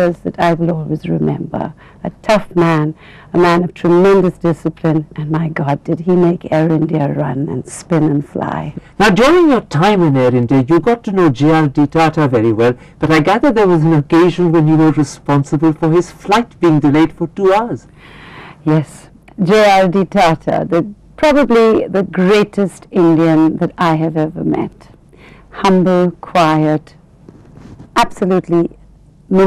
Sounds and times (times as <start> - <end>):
Conversation: 0.0 - 29.4.